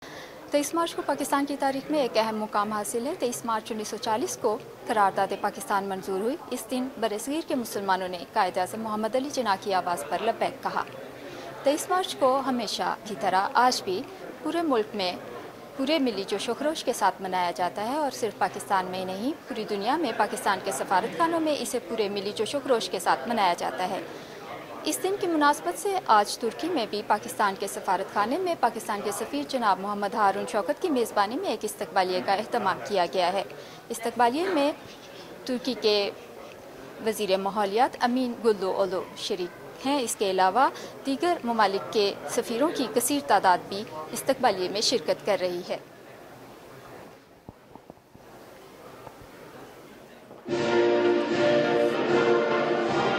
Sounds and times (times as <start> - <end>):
Speech: 0.5 - 47.1.